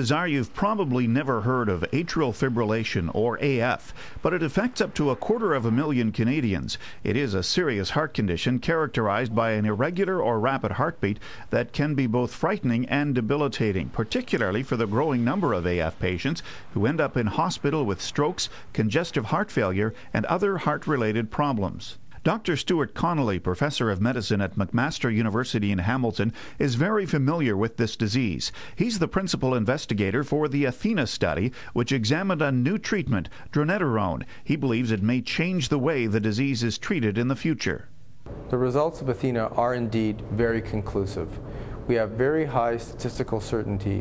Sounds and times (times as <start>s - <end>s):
Speech: 0.0s - 37.9s, 38.5s - 44.0s.